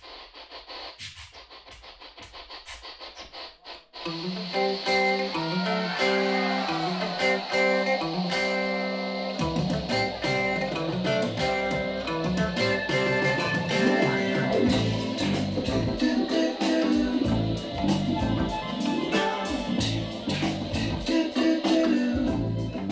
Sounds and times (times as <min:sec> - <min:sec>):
Blues: 0:00.0 - 0:22.9.